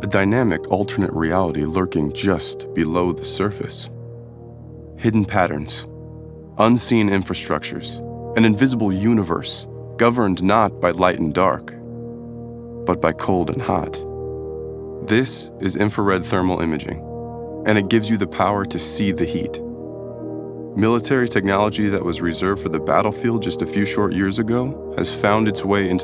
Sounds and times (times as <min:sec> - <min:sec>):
Speech: 0:00.0 - 0:03.9, 0:05.0 - 0:05.9, 0:06.6 - 0:11.8, 0:12.9 - 0:14.0, 0:15.0 - 0:17.0, 0:17.7 - 0:19.6, 0:20.8 - 0:26.0
Music: 0:00.0 - 0:26.0.